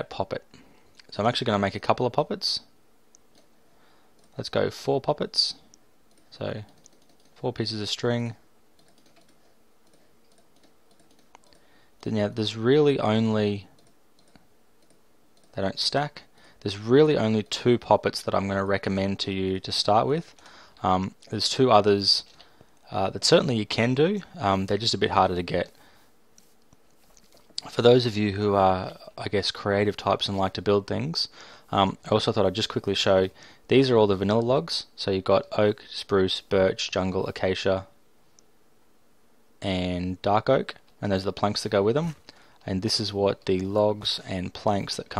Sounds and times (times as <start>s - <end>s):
Speech: 0.0s - 2.7s, 4.4s - 5.7s, 6.3s - 6.8s, 7.4s - 8.5s, 12.0s - 13.7s, 15.5s - 25.8s, 27.6s - 38.0s, 39.6s - 45.1s.